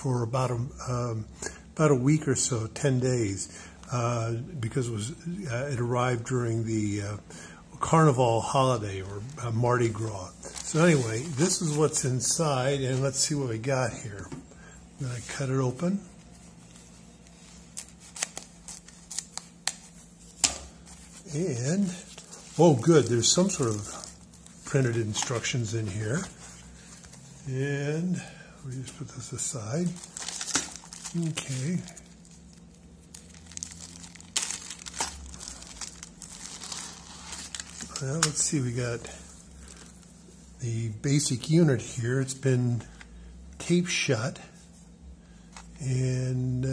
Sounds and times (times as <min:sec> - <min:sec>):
Speech: 0:00.0 - 0:14.4, 0:15.0 - 0:16.2, 0:21.2 - 0:26.4, 0:27.4 - 0:30.0, 0:31.1 - 0:32.1, 0:37.9 - 0:39.3, 0:40.6 - 0:42.9, 0:43.6 - 0:44.6, 0:45.8 - 0:46.7.